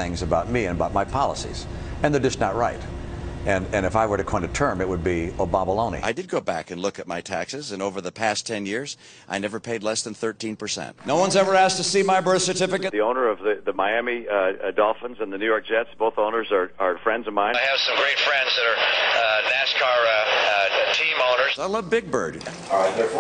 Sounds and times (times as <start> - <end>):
Speech: 0.0 - 2.9, 3.5 - 23.2.